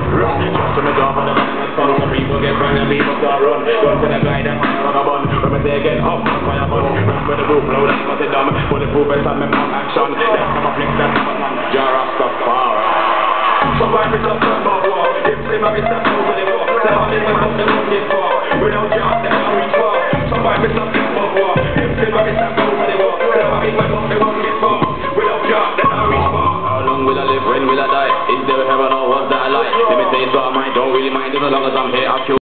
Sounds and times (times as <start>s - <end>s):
Dubstep: 0.0s - 32.4s.